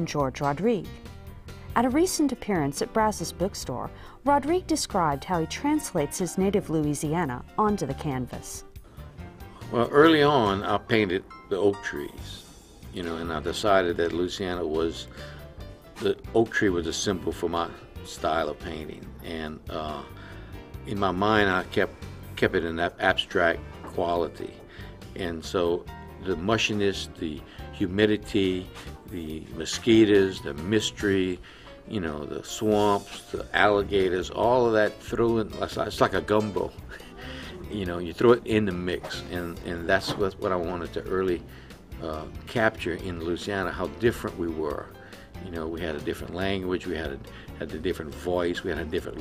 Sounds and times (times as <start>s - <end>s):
Speech: 0.0s - 0.9s, 1.8s - 8.6s, 9.7s - 12.4s, 13.0s - 15.1s, 16.0s - 20.1s, 20.9s - 24.6s, 25.2s - 36.7s, 37.6s - 41.4s, 42.0s - 49.2s
Music: 0.0s - 49.2s.